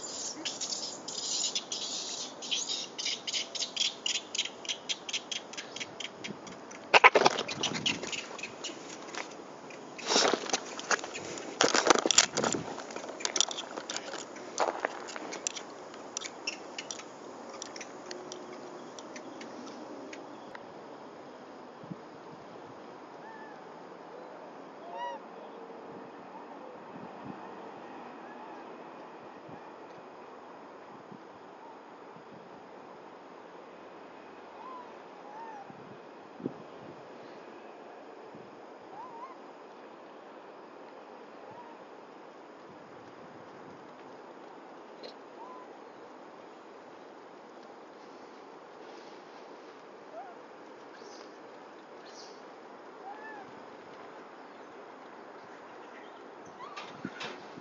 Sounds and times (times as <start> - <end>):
Outside, rural or natural: 0.0 - 57.6.